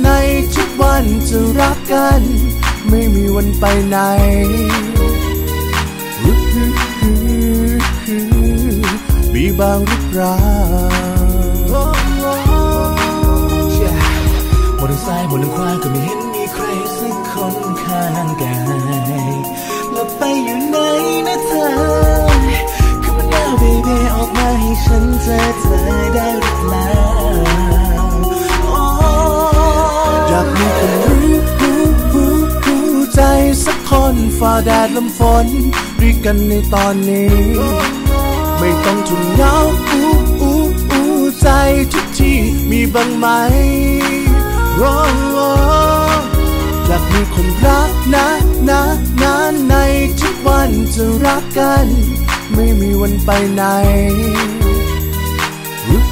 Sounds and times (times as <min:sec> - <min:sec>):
Music: 0:00.0 - 0:56.1.